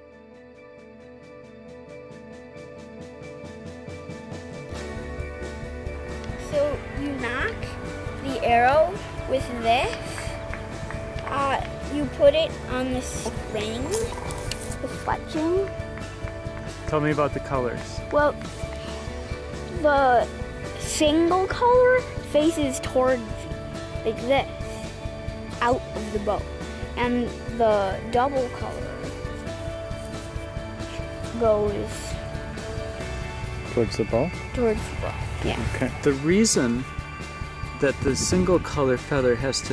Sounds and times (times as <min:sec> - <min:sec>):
Music: 0:00.0 - 0:39.7.